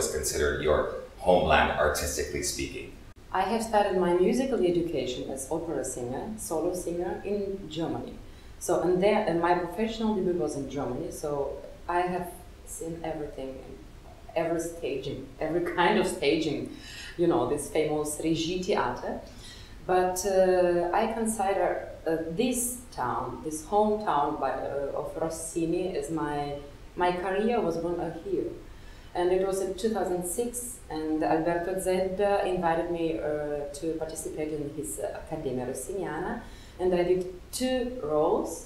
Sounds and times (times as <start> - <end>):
Speech: 0.0 - 19.2, 19.9 - 28.5, 29.2 - 38.6.